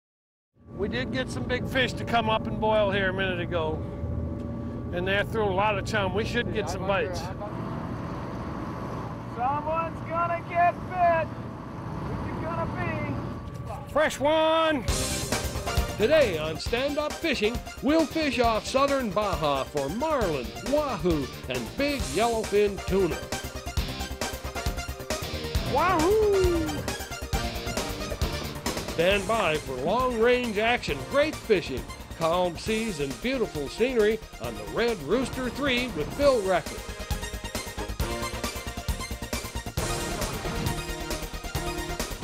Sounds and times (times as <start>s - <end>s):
Music: 0.6s - 7.3s, 13.6s - 42.2s.